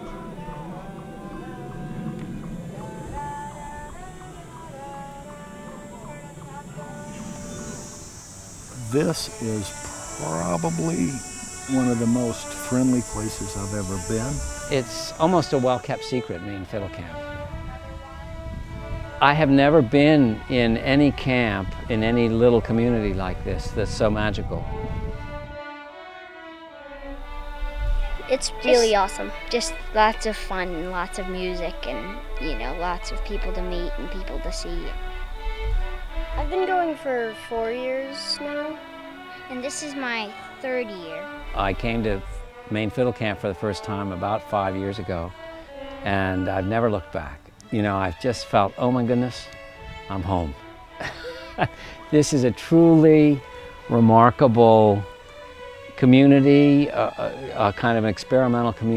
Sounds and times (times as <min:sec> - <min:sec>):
Violin, fiddle: 0:08.7 - 0:58.9
Speech: 0:08.8 - 0:17.2, 0:19.2 - 0:24.6, 0:28.3 - 0:34.9, 0:41.6 - 0:45.3, 0:46.1 - 0:49.5, 0:50.1 - 0:50.6, 0:52.2 - 0:55.0, 0:56.0 - 0:58.9.